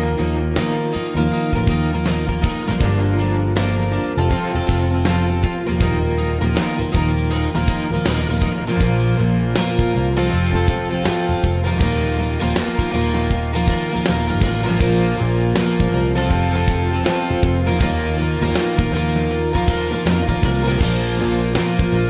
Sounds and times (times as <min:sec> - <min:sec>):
Music: 0:00.0 - 0:22.1.